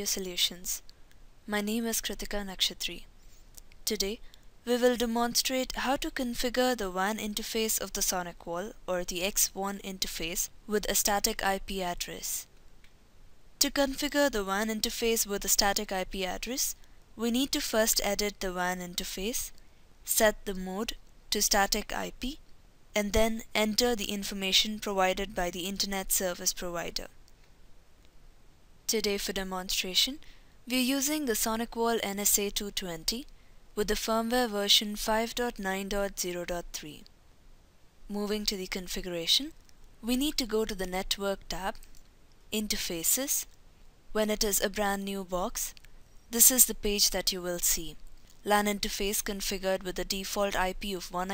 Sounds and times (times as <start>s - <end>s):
Speech: 0.0s - 0.9s, 1.5s - 3.1s, 3.9s - 12.5s, 13.6s - 22.4s, 23.0s - 27.2s, 28.9s - 37.1s, 38.1s - 41.8s, 42.6s - 43.5s, 44.2s - 51.3s.